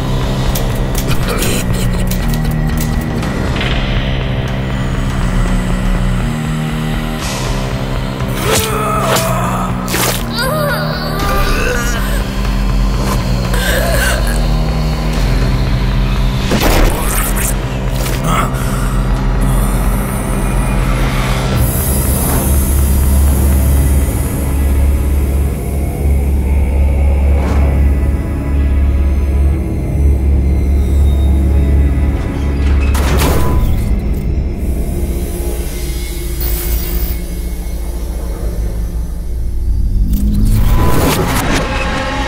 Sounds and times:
Scary music: 0.0s - 42.2s.

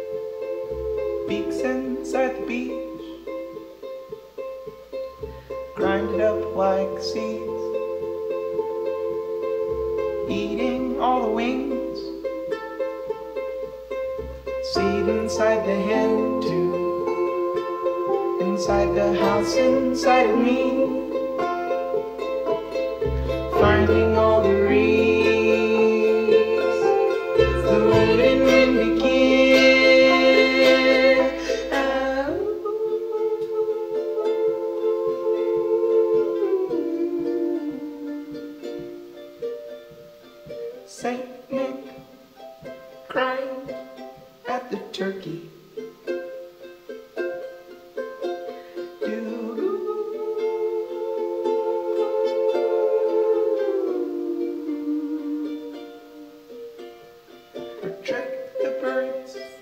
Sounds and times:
Music: 0.0s - 59.6s.

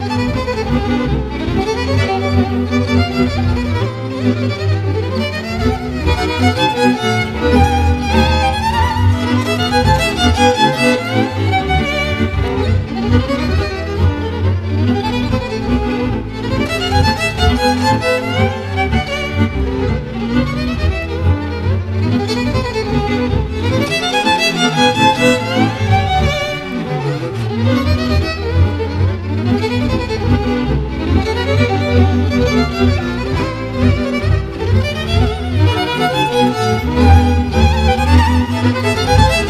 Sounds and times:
Music: 0.0s - 39.4s.

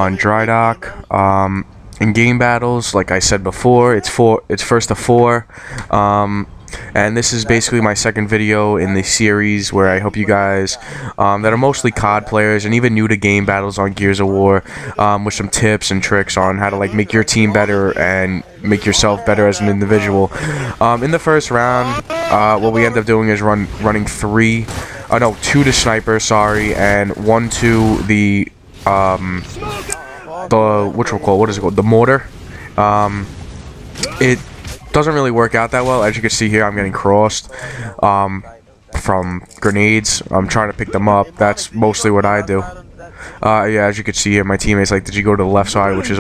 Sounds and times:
Speech: 0.0s - 33.3s, 34.0s - 46.2s.

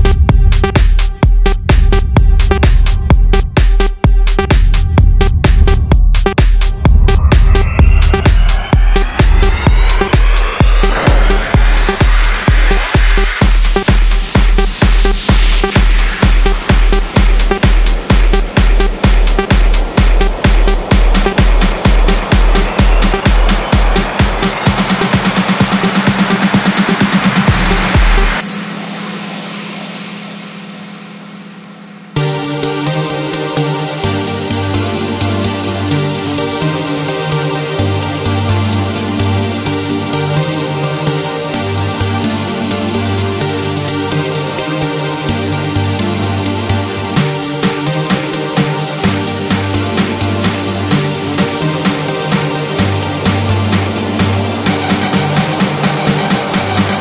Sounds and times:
Music: 0.0s - 57.0s.

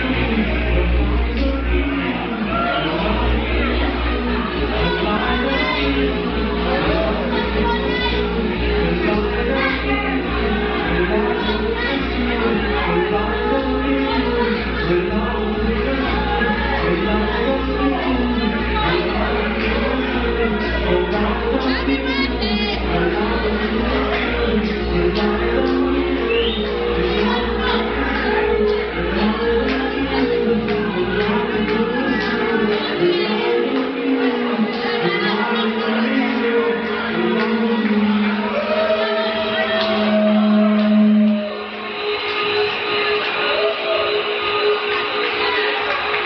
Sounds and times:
Speech: 0.0s - 40.7s
Music: 0.0s - 46.2s.

